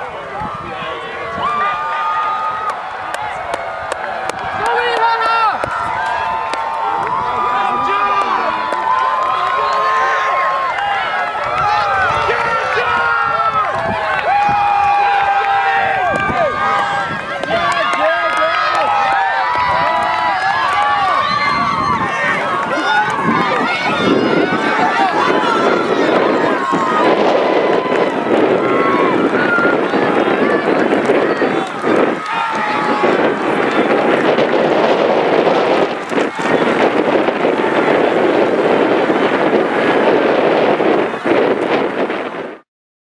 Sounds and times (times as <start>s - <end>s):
Outside, urban or manmade: 0.0s - 42.6s
Run: 0.0s - 42.6s.